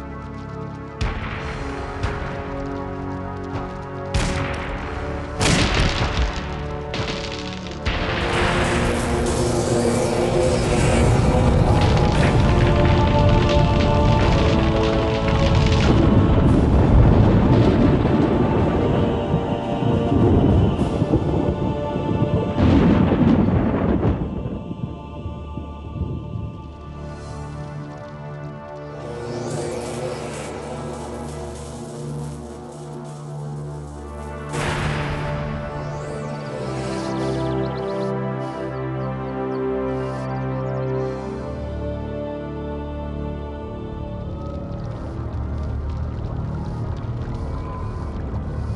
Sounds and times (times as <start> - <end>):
Music: 0.0 - 48.7.